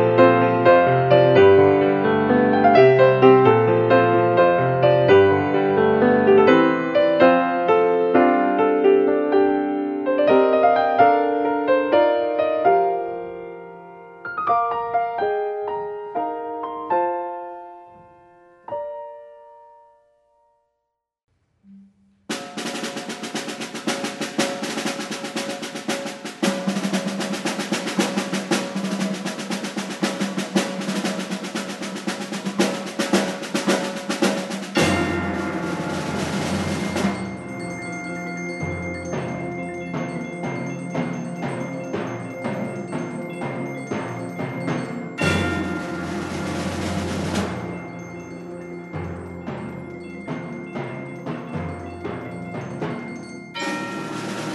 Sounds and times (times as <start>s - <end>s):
Percussion: 21.7s - 54.5s.